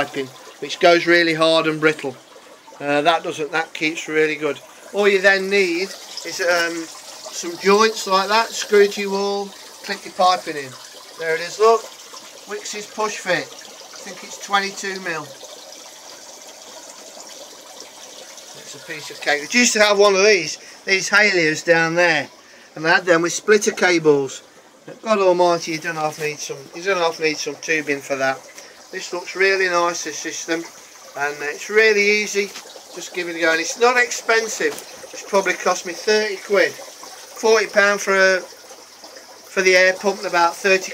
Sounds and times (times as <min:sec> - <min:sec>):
Water: 0:00.0 - 0:40.9
Water tap, faucet: 0:00.0 - 0:40.9.